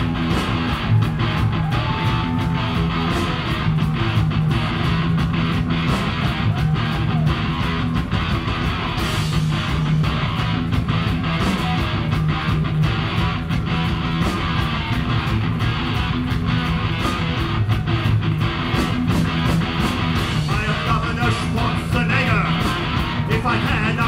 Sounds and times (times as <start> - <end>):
Music: 0.0 - 24.0.